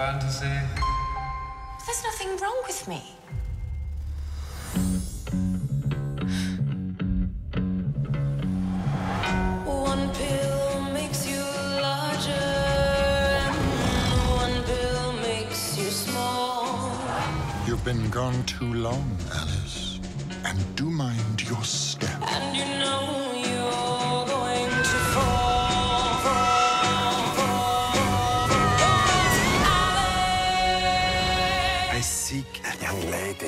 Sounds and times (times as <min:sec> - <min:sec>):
Music: 0:00.0 - 0:33.4
Speech: 0:17.7 - 0:22.3, 0:31.9 - 0:33.4.